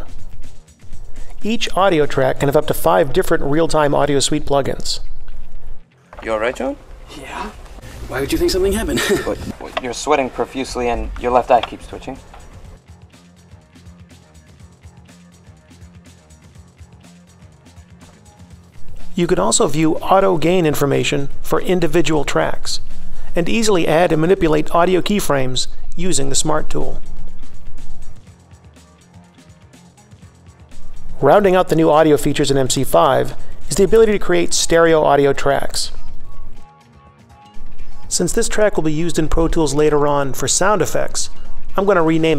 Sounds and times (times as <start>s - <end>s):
Music: 0.0s - 42.3s
Speech: 1.4s - 5.0s, 6.2s - 12.2s, 19.2s - 22.8s, 23.4s - 27.0s, 31.2s - 36.0s, 38.1s - 42.3s.